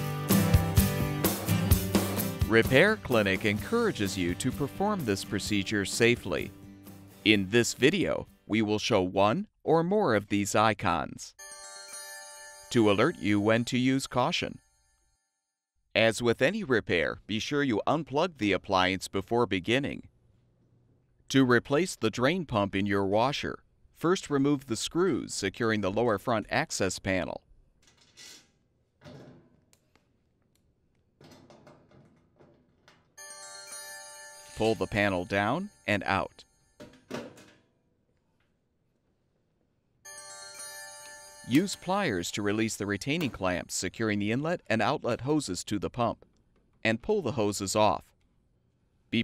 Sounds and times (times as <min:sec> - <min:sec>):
Music: 0:00.0 - 0:08.8, 0:11.4 - 0:14.2, 0:33.2 - 0:36.8, 0:40.1 - 0:43.3
Speech: 0:02.5 - 0:06.5, 0:07.3 - 0:11.4, 0:12.7 - 0:14.6, 0:16.0 - 0:20.1, 0:21.3 - 0:27.4, 0:34.6 - 0:36.4, 0:41.5 - 0:46.2, 0:46.8 - 0:48.1.